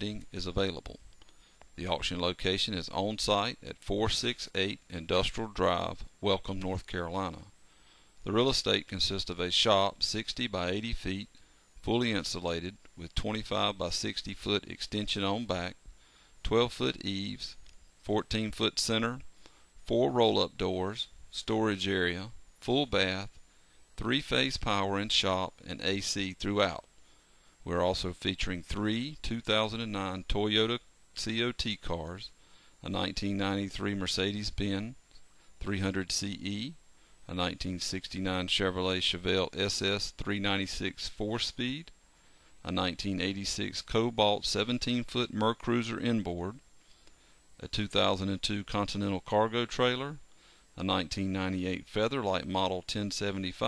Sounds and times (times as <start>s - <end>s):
Speech: 0.0s - 1.0s, 1.8s - 7.5s, 8.2s - 15.8s, 16.4s - 23.4s, 24.0s - 26.9s, 27.6s - 35.0s, 35.6s - 42.0s, 42.6s - 46.6s, 47.6s - 50.2s, 50.8s - 53.6s.